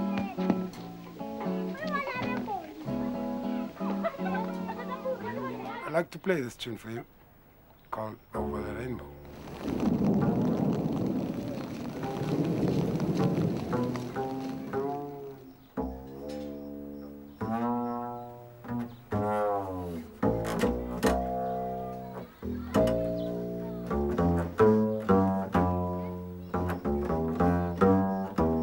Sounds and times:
Didgeridoo: 8.4s - 28.6s.

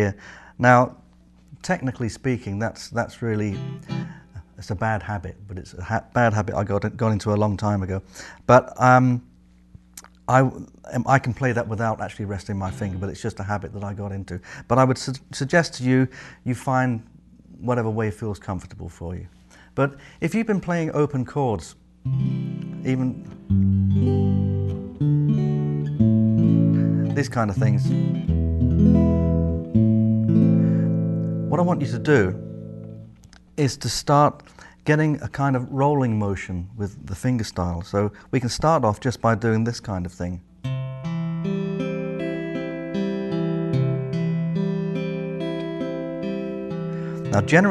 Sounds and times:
Speech: 0.0s - 3.6s, 4.4s - 9.3s, 10.0s - 21.8s, 22.8s - 23.3s, 27.1s - 28.0s, 31.5s - 32.4s, 33.6s - 40.5s, 47.3s - 47.7s
Strum: 3.4s - 4.3s, 11.4s - 13.9s, 22.0s - 33.3s.

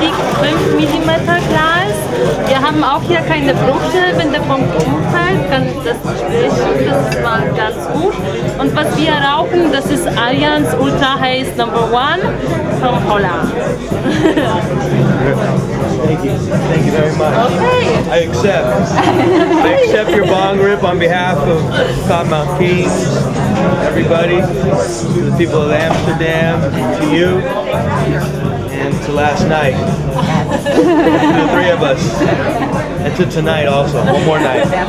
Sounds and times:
Music: 0.0s - 34.8s.

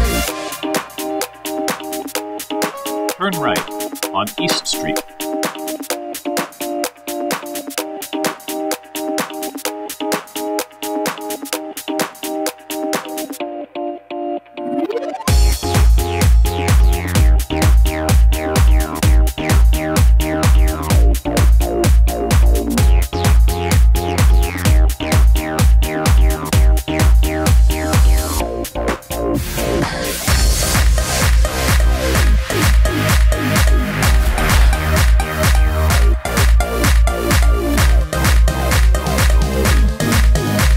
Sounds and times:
Music: 0.0s - 40.7s.

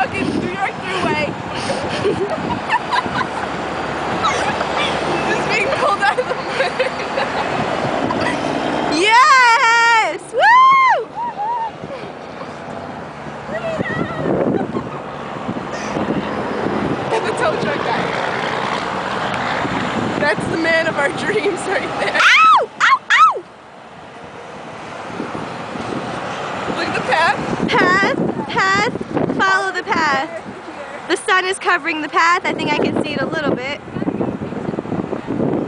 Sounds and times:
Car: 0.0s - 35.6s
Wind: 0.0s - 35.6s.

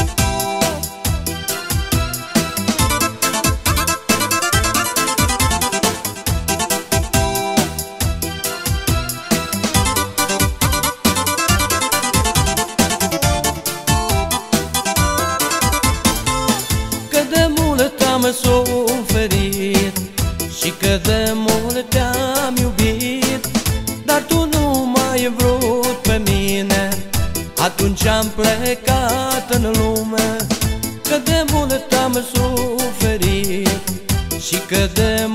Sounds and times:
Music: 0.0s - 35.3s.

